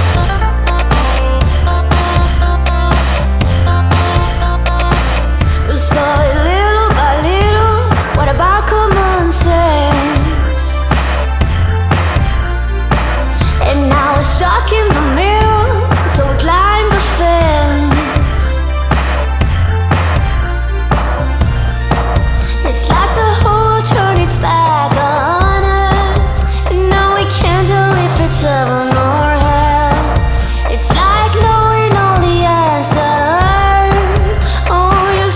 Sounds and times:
Music: 0:00.0 - 0:35.3.

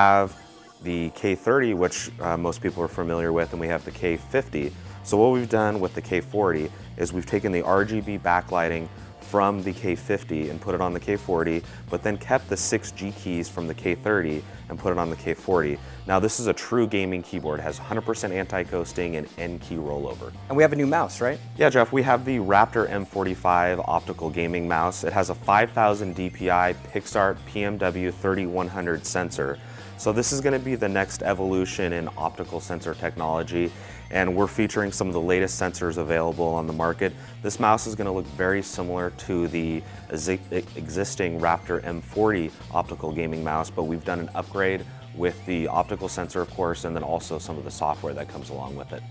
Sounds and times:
Music: 0:00.0 - 0:49.1
Speech: 0:00.0 - 0:49.1.

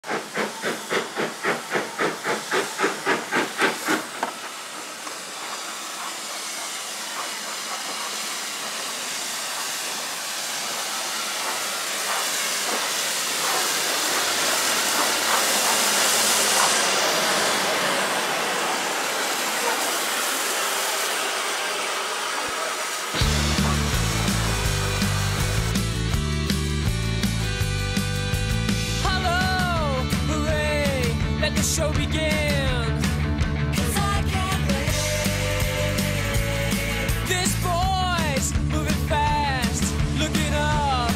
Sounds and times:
Hiss: 0:00.0 - 0:29.0, 0:34.7 - 0:37.2
Train: 0:00.0 - 0:41.1.

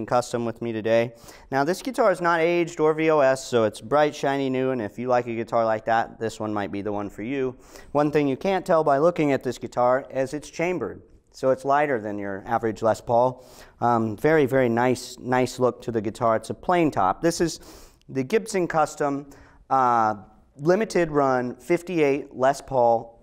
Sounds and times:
Speech: 0:00.0 - 0:23.2.

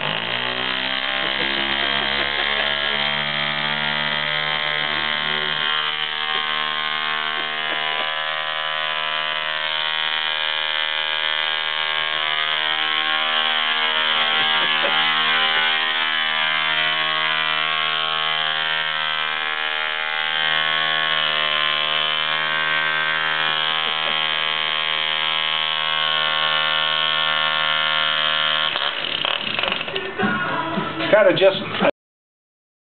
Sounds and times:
Speech: 0:31.0 - 0:31.9.

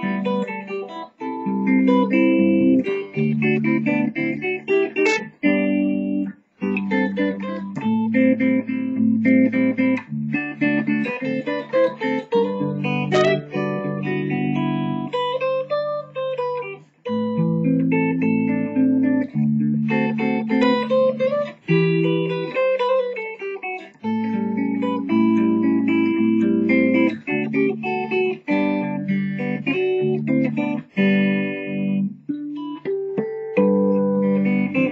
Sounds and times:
Electric guitar: 0:00.0 - 0:34.9
Strum: 0:06.7 - 0:15.1.

